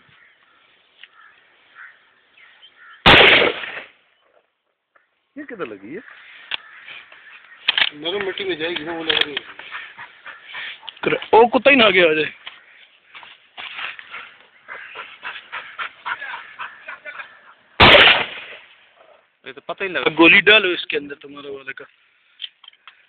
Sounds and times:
Animal: 0:08.8 - 0:11.1, 0:14.0 - 0:17.6.

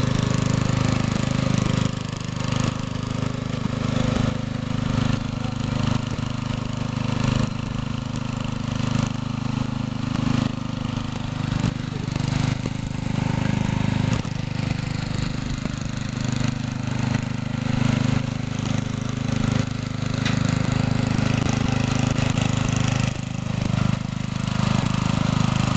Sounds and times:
Vehicle: 0:00.0 - 0:25.7.

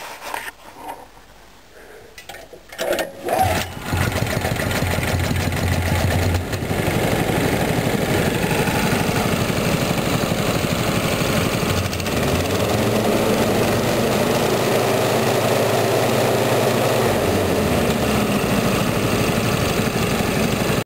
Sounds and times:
Idling: 0:03.4 - 0:20.8
Medium engine (mid frequency): 0:03.4 - 0:20.8
Vehicle: 0:03.4 - 0:20.8
Accelerating, revving, vroom: 0:12.0 - 0:19.0.

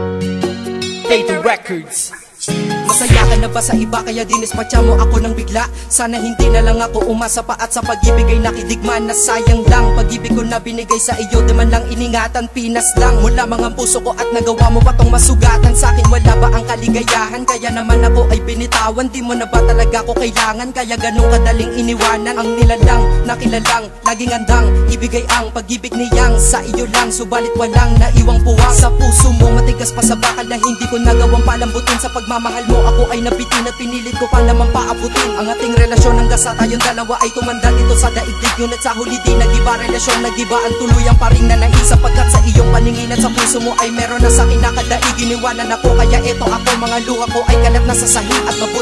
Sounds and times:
Music: 0:00.0 - 0:48.8.

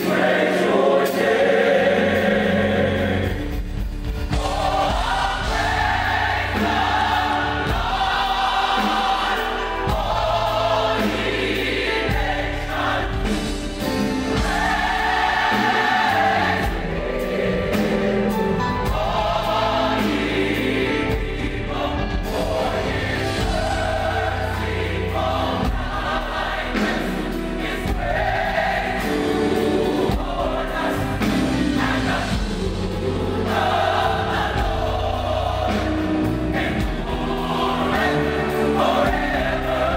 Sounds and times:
Choir: 0:00.0 - 0:39.9.

